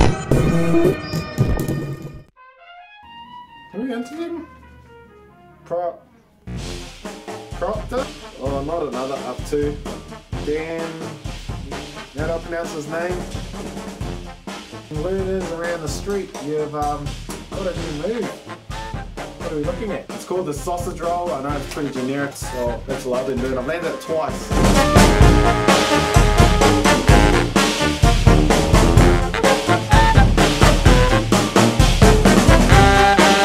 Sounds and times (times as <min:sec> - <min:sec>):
Music: 0:00.0 - 0:33.4
Speech: 0:03.7 - 0:04.5, 0:05.7 - 0:06.1, 0:07.6 - 0:13.3, 0:14.9 - 0:18.4, 0:19.4 - 0:24.5.